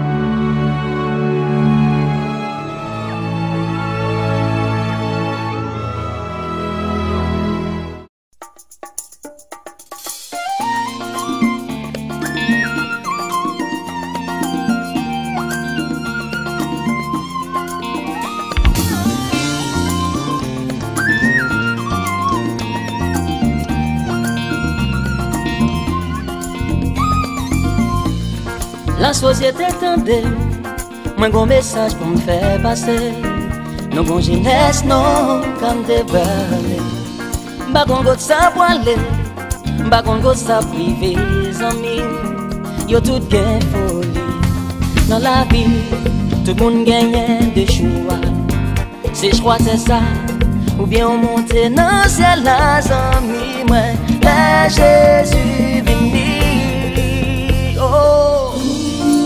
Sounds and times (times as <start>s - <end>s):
Music: 0.0s - 59.2s.